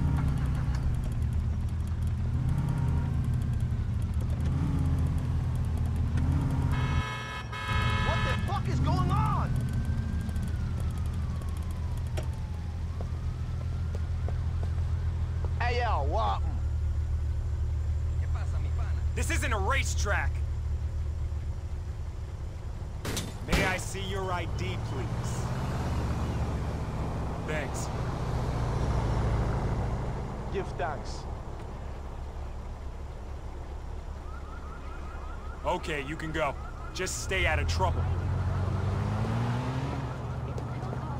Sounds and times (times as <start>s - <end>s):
Speech: 23.5s - 25.5s, 27.4s - 27.9s, 35.7s - 38.0s.